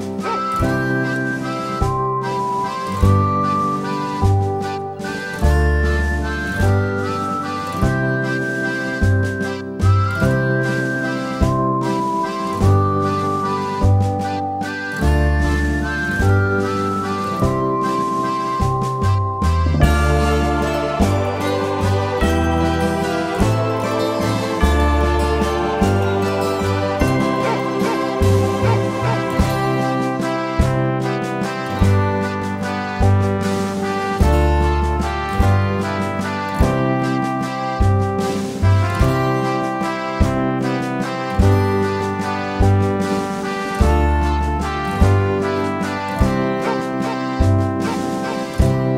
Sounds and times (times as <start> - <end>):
Music: 0.0 - 48.9.